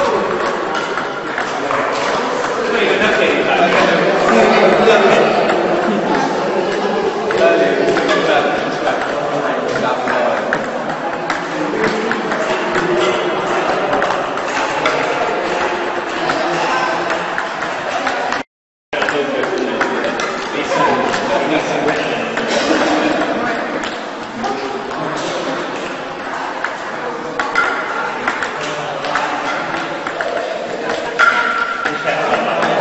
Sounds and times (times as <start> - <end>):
Speech: 0.0 - 18.4, 19.0 - 32.8.